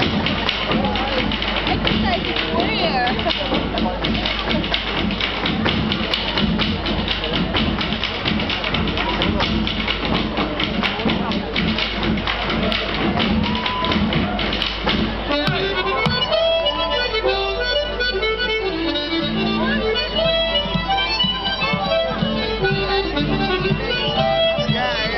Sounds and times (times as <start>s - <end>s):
Traditional music: 0.0s - 25.1s.